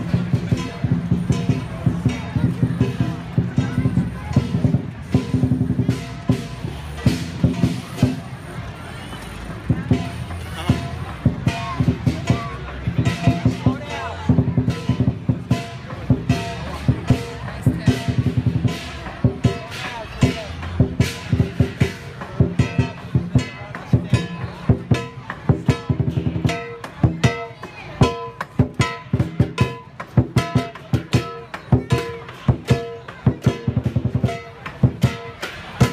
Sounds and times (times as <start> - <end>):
Music: 0.0 - 35.9
Speech: 0.0 - 35.9.